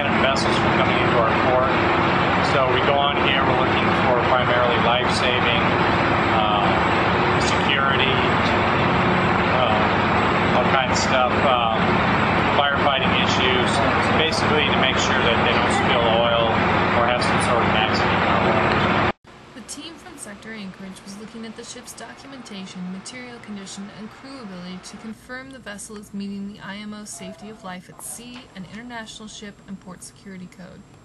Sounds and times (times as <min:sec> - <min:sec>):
Speech: 0:00.0 - 0:01.8, 0:02.4 - 0:05.8, 0:06.4 - 0:08.6, 0:09.5 - 0:10.0, 0:10.6 - 0:11.9, 0:12.6 - 0:18.8, 0:19.6 - 0:30.8.